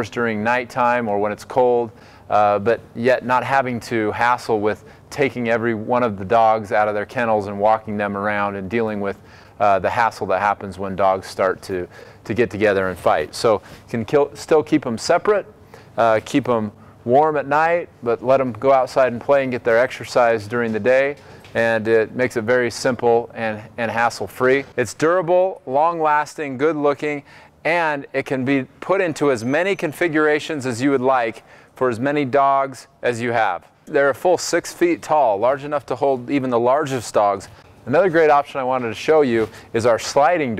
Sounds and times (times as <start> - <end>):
Speech: 0.0 - 40.5.